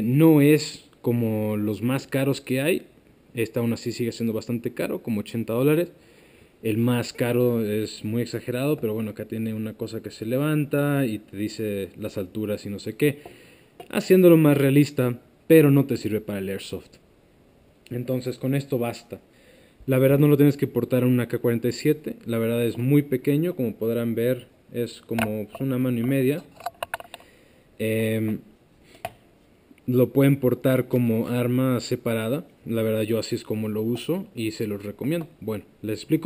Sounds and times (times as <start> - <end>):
Speech: 0.0 - 6.0, 6.6 - 13.2, 13.8 - 17.0, 17.9 - 19.3, 19.9 - 26.5, 27.8 - 28.5, 29.9 - 36.2.